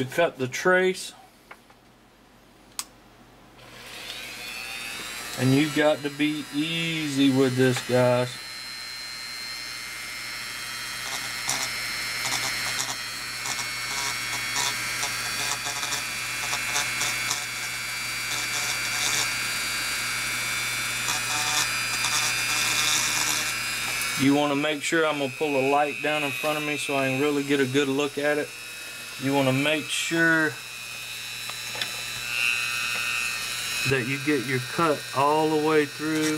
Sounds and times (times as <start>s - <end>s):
Speech: 0.0s - 1.2s, 5.4s - 8.4s, 24.2s - 28.5s, 29.2s - 30.6s, 33.8s - 36.3s.